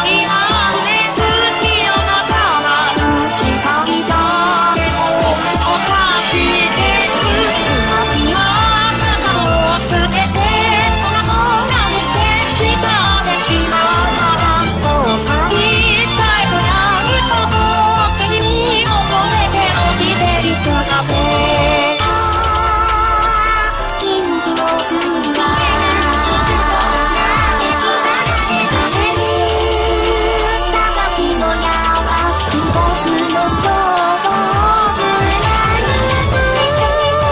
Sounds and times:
Music of Asia: 0:00.0 - 0:37.3.

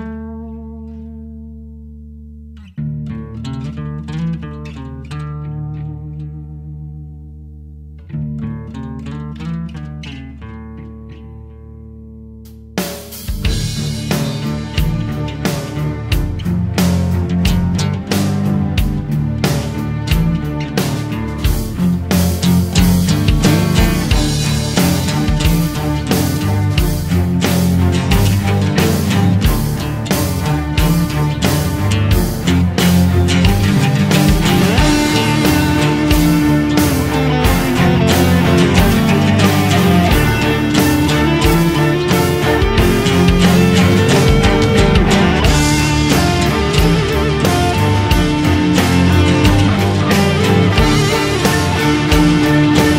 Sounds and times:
Music: 0:00.0 - 0:52.9.

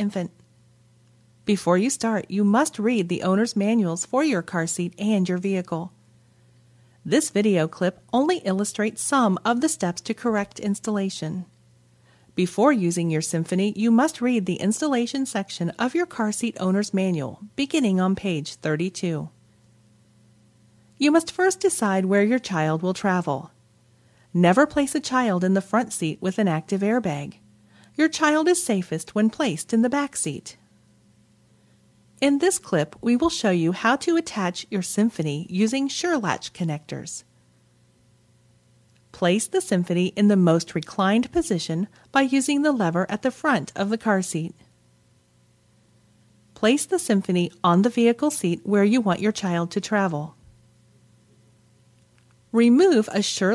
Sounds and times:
Speech: 0:00.0 - 0:00.4, 0:01.4 - 0:06.0, 0:07.1 - 0:11.5, 0:12.4 - 0:19.4, 0:21.0 - 0:23.6, 0:24.3 - 0:27.4, 0:28.0 - 0:30.6, 0:32.2 - 0:37.3, 0:39.1 - 0:44.7, 0:46.6 - 0:50.4, 0:52.5 - 0:53.5.

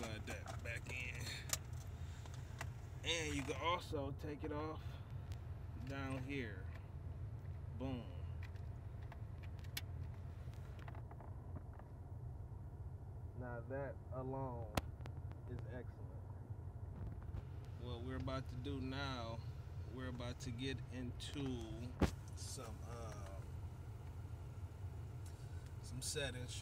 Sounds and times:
Speech: 0:00.0 - 0:01.5, 0:03.0 - 0:05.0, 0:05.8 - 0:06.7, 0:07.8 - 0:08.3, 0:13.4 - 0:14.8, 0:15.5 - 0:16.3, 0:17.8 - 0:23.5, 0:25.8 - 0:26.6.

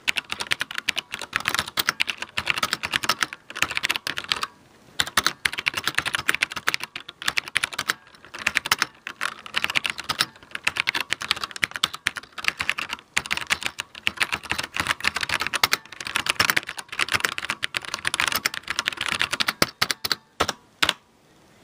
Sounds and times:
Computer keyboard: 0:00.0 - 0:21.0.

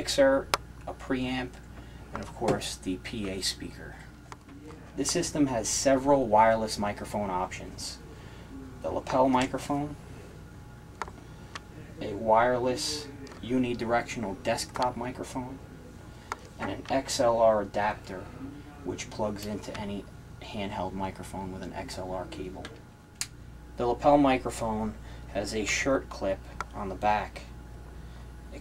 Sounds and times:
Speech: 0:00.0 - 0:01.6, 0:02.2 - 0:10.0, 0:11.7 - 0:16.0, 0:16.6 - 0:22.8, 0:23.8 - 0:27.5.

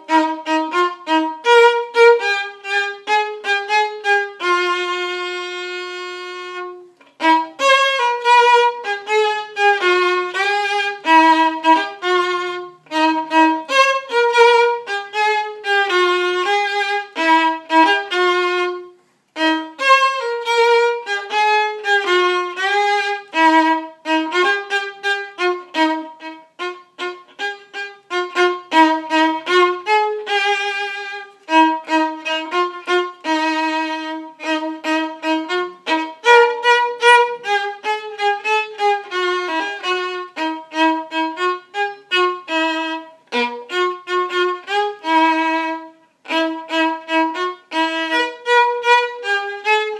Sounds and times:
Violin, fiddle: 0:00.0 - 0:49.9.

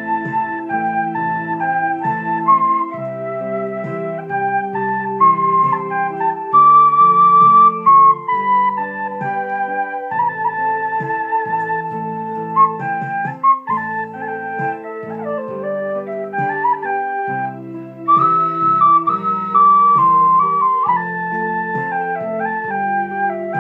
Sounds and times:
Flute: 0:00.0 - 0:23.6.

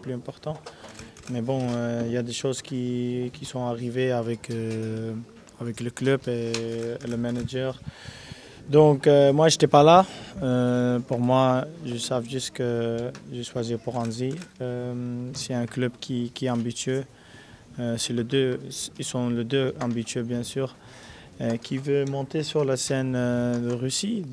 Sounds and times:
Speech: 0:00.0 - 0:00.6, 0:01.3 - 0:07.8, 0:08.7 - 0:17.1, 0:17.8 - 0:20.8, 0:21.4 - 0:24.3.

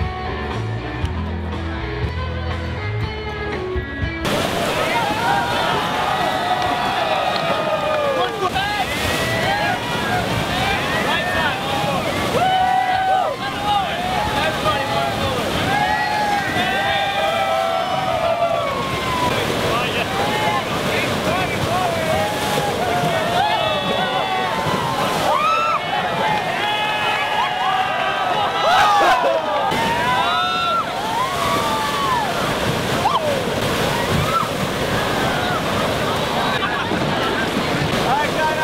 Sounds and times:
Stream: 0:00.0 - 0:38.6
Waterfall: 0:04.2 - 0:38.6.

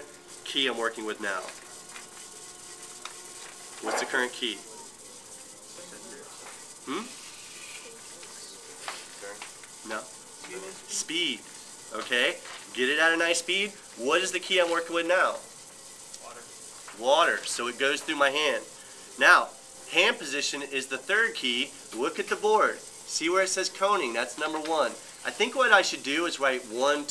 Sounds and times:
Speech: 0:00.5 - 0:01.6, 0:03.8 - 0:05.0, 0:07.9 - 0:15.4, 0:16.2 - 0:27.1.

